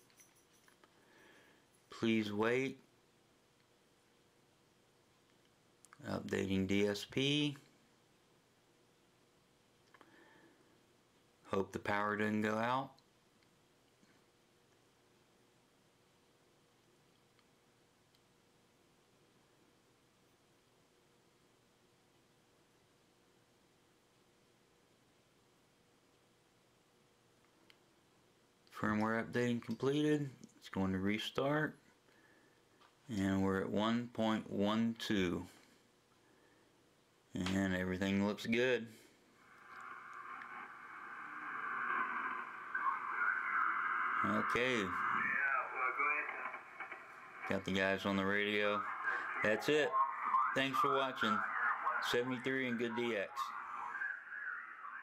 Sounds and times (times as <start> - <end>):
Speech: 1.9 - 2.9, 6.0 - 7.7, 11.5 - 13.0, 28.7 - 31.8, 33.1 - 35.6, 37.3 - 39.0, 42.7 - 55.0
Radio: 37.4 - 55.0.